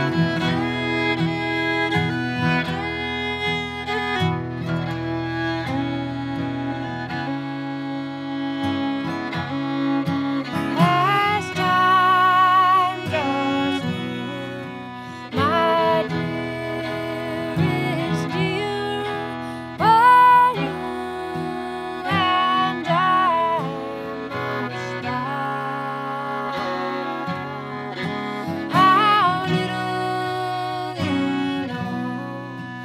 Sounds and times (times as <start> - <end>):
Music: 0.0 - 32.8.